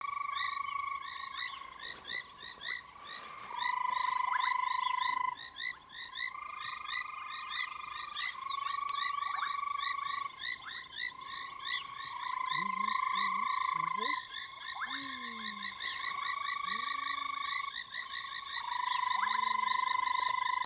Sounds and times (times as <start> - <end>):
Croak: 0.0 - 20.6.